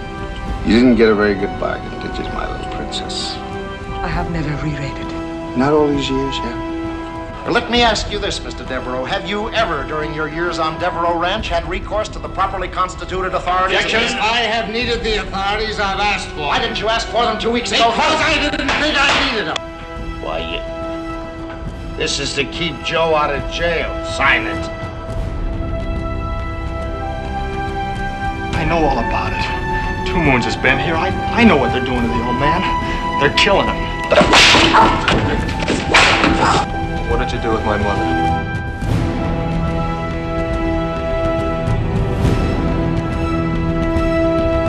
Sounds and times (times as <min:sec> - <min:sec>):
Music: 0:00.0 - 0:44.6.